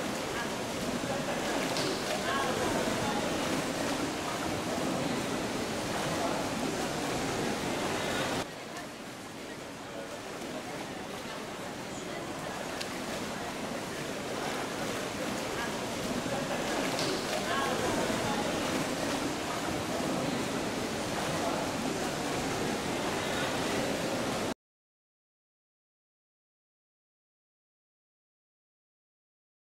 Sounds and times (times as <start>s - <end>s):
Speech: 0.0s - 24.6s.